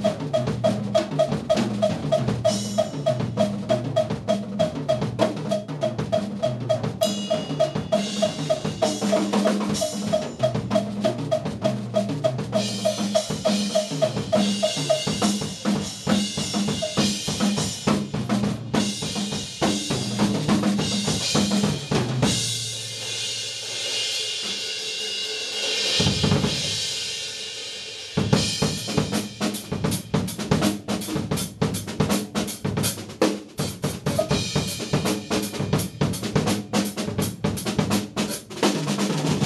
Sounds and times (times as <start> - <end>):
Bass drum: 0.0 - 22.8, 28.2 - 39.4
Drum kit: 0.0 - 39.4.